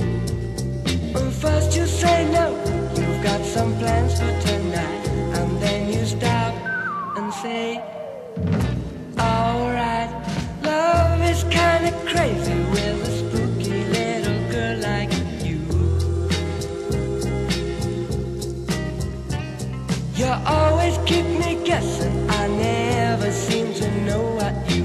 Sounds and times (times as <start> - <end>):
Music: 0.0 - 24.8.